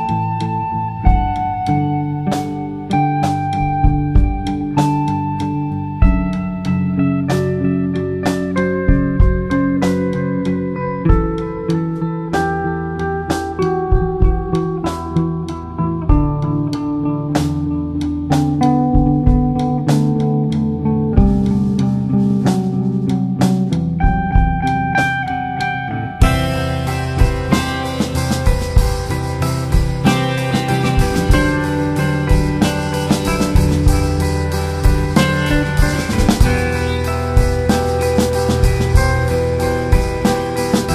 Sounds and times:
Steel guitar, slide guitar: 0.0s - 40.9s.

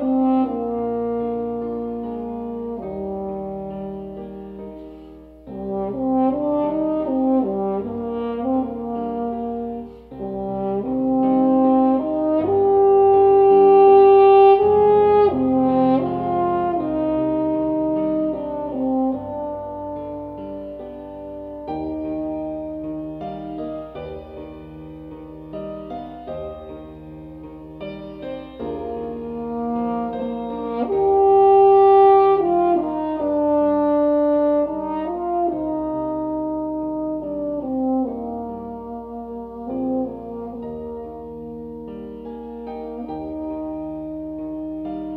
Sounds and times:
French horn: 0.0s - 45.1s.

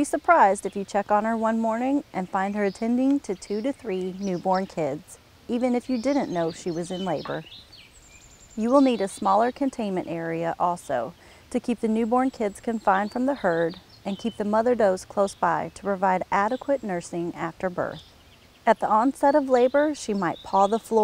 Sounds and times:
Speech: 0.0s - 7.5s, 8.6s - 18.0s, 18.7s - 21.0s.

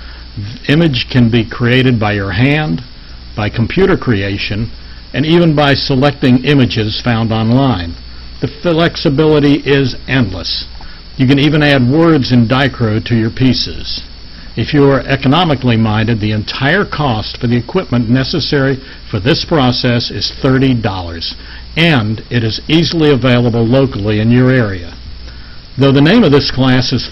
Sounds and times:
Speech: 0.4s - 25.0s, 25.8s - 27.1s.

